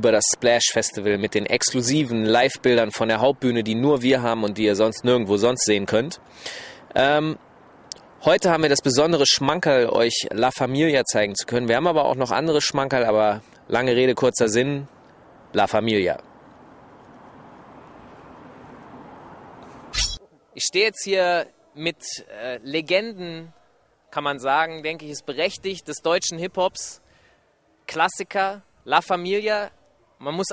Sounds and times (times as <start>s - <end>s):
Speech: 0.0s - 6.2s, 6.9s - 7.4s, 8.2s - 14.9s, 15.6s - 16.2s, 20.5s - 27.0s, 27.9s - 30.5s.